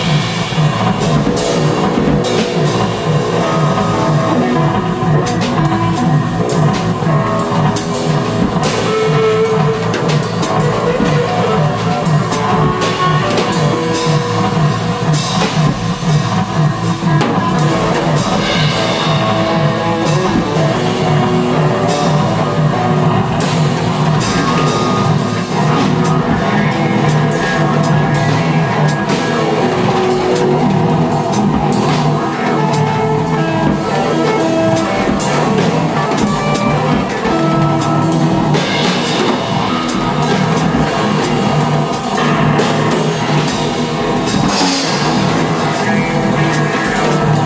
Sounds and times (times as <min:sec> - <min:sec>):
Drum: 0:00.0 - 0:47.4
Drum kit: 0:00.0 - 0:47.4
Guitar: 0:00.0 - 0:47.4
Rock music: 0:00.0 - 0:47.4.